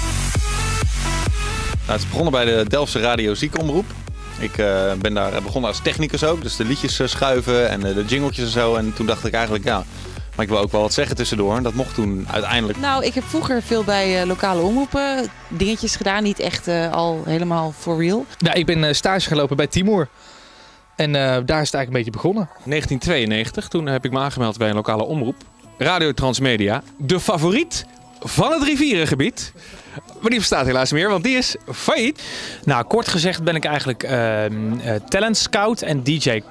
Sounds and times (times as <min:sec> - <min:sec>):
Speech: 0:01.9 - 0:20.1, 0:21.0 - 0:36.5.